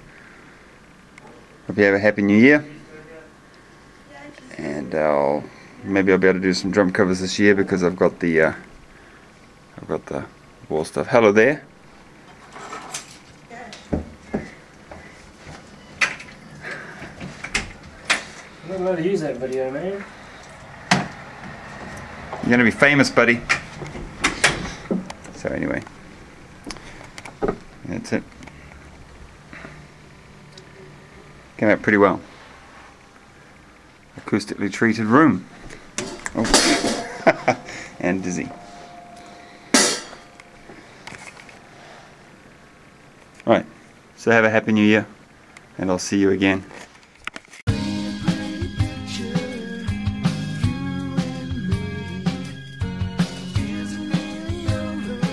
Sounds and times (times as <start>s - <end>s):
Speech: 18.6s - 20.1s, 22.4s - 23.5s, 25.4s - 25.8s, 34.2s - 35.5s, 38.0s - 38.5s, 43.4s - 45.1s, 45.8s - 46.7s.